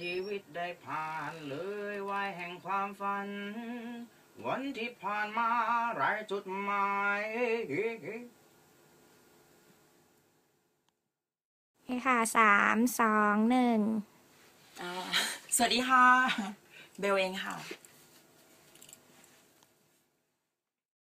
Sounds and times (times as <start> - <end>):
Speech: 11.9 - 14.1, 14.8 - 17.8.